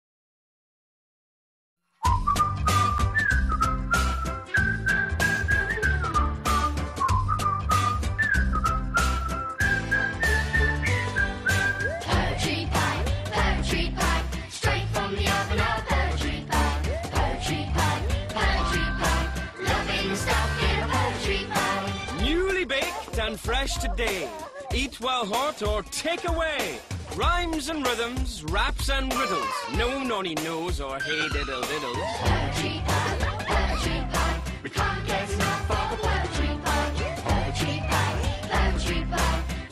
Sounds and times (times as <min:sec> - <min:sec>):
Music: 0:01.9 - 0:39.7.